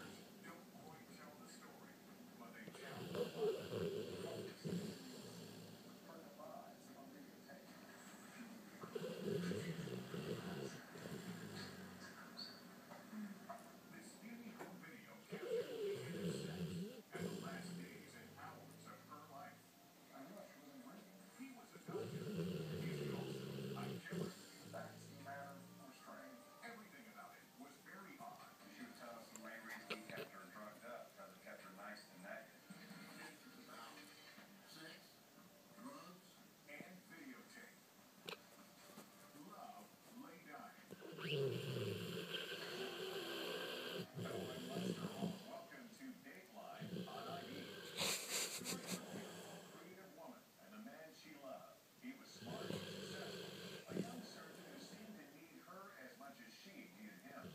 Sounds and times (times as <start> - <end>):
Speech: 0.0 - 57.5.